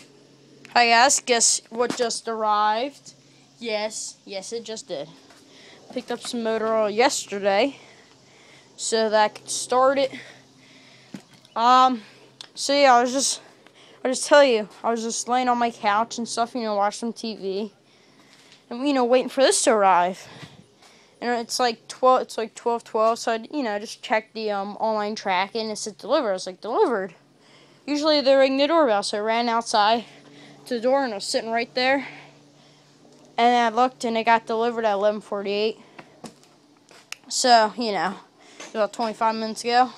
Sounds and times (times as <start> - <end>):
Speech: 0.7 - 5.2, 5.9 - 7.8, 8.8 - 10.3, 11.6 - 13.4, 14.1 - 17.7, 18.7 - 20.3, 21.2 - 27.2, 27.9 - 32.2, 33.4 - 35.8, 37.3 - 38.2, 38.8 - 39.9.